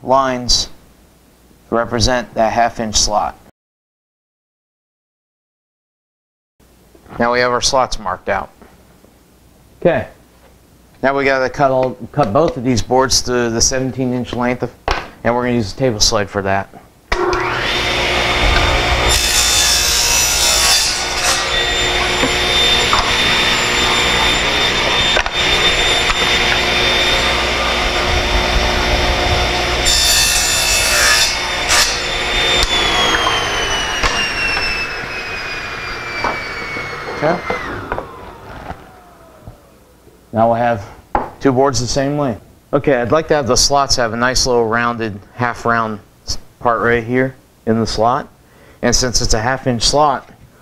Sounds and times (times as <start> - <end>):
Sawing: 17.1 - 39.5
Wood: 17.1 - 39.6.